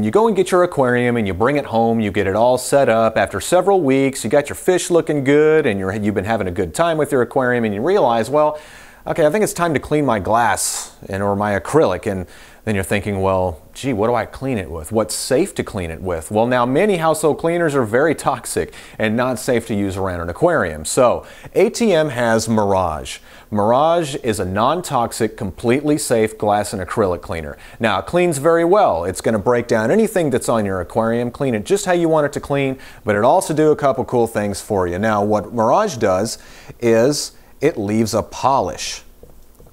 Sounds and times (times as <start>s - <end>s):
Speech: 0.0s - 39.1s.